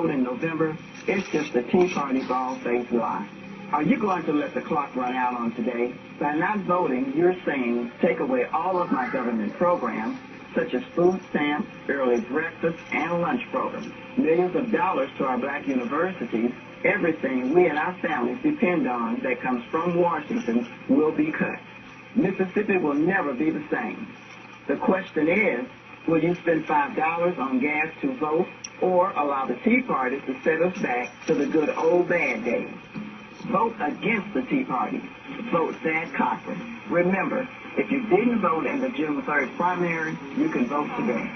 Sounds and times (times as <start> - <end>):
Radio: 0.0 - 41.3
Speech: 0.0 - 41.3.